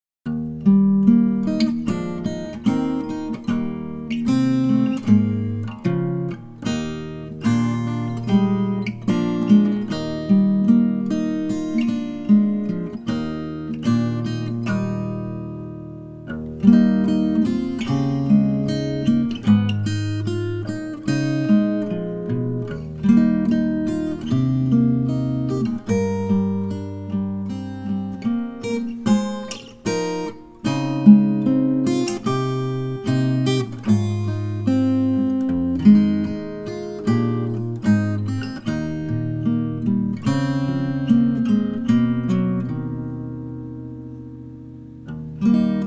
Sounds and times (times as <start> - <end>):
Acoustic guitar: 0.2 - 45.8
Strum: 0.3 - 45.8.